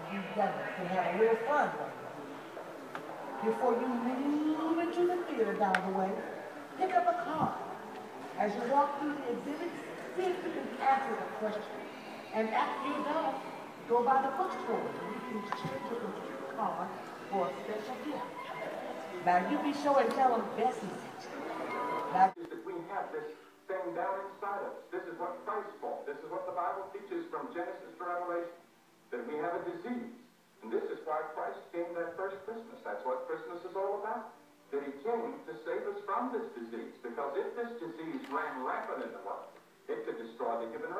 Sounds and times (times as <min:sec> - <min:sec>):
Speech: 0:08.4 - 0:18.3, 0:22.1 - 0:40.9.